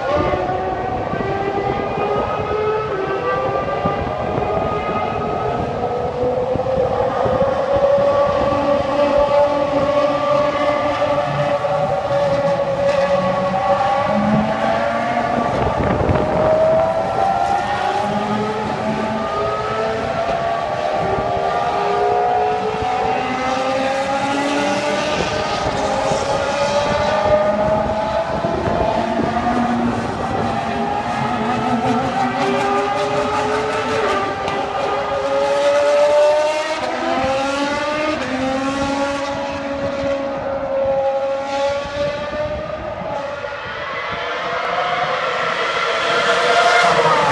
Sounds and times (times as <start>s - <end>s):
Accelerating, revving, vroom: 0.0s - 47.3s
Car: 0.0s - 47.3s.